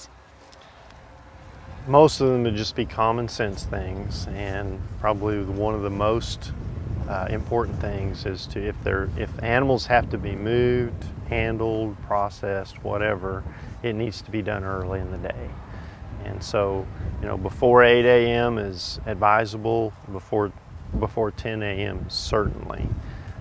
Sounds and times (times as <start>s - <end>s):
Speech: 1.9s - 15.6s, 16.2s - 23.0s.